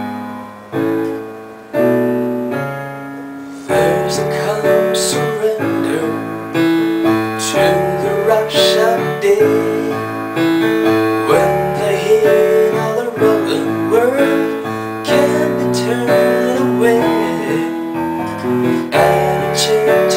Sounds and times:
Music: 0:00.0 - 0:20.1
Male singing: 0:03.7 - 0:06.6, 0:07.3 - 0:10.3, 0:11.2 - 0:20.1.

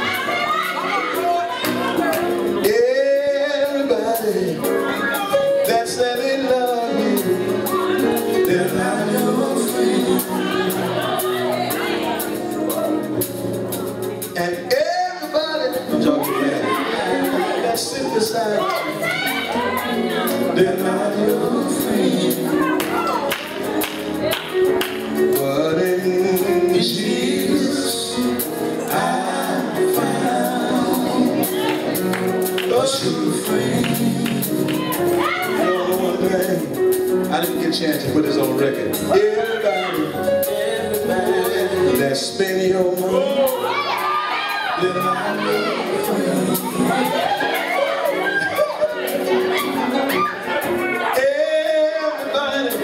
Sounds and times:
Music: 0:00.0 - 0:52.8
Male singing: 0:02.6 - 0:04.8, 0:05.4 - 0:10.9, 0:14.4 - 0:19.0, 0:20.3 - 0:23.0, 0:25.3 - 0:31.6, 0:32.6 - 0:43.7, 0:44.7 - 0:47.5, 0:51.0 - 0:52.8.

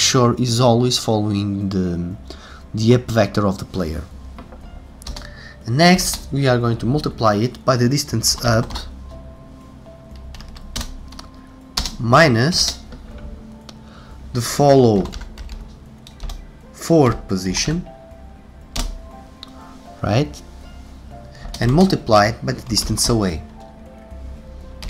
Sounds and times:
Speech: 0:00.0 - 0:02.2, 0:02.8 - 0:04.1, 0:05.7 - 0:08.9, 0:12.0 - 0:12.8, 0:14.4 - 0:15.2, 0:16.8 - 0:17.9, 0:20.0 - 0:20.4, 0:21.6 - 0:23.4
Music: 0:00.0 - 0:24.8
Computer keyboard: 0:10.2 - 0:12.0, 0:15.0 - 0:16.4, 0:21.4 - 0:21.9.

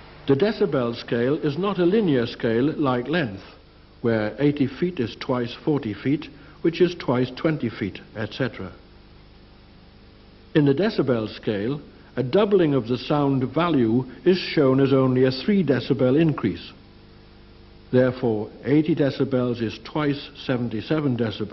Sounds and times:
Speech: 0:00.3 - 0:08.8, 0:10.6 - 0:16.8, 0:17.9 - 0:21.5.

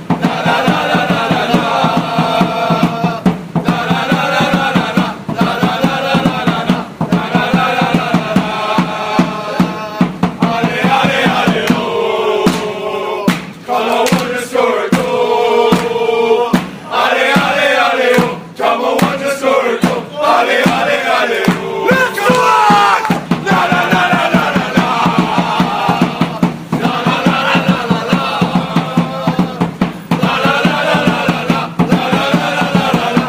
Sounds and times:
Music: 0:00.0 - 0:21.9, 0:22.7 - 0:33.2.

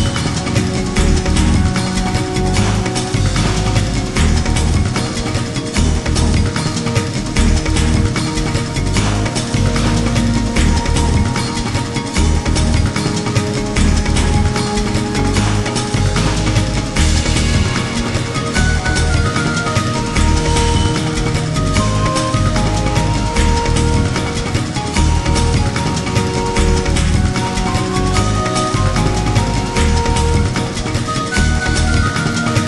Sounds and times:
Exciting music: 0:00.0 - 0:32.6.

